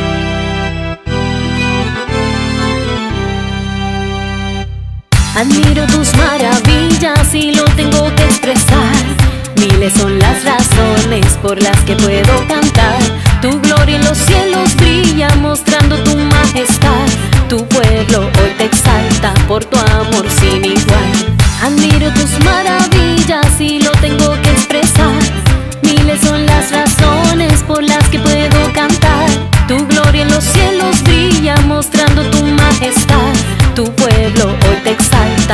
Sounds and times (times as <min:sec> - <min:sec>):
Music: 0:00.0 - 0:35.5.